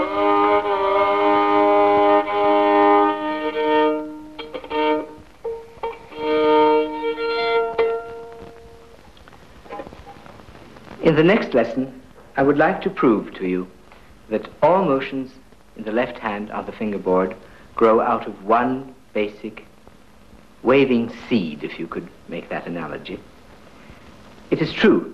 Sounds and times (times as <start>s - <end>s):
Violin, fiddle: 0.0s - 8.8s
Speech: 11.0s - 19.7s, 20.6s - 23.2s, 24.5s - 25.1s.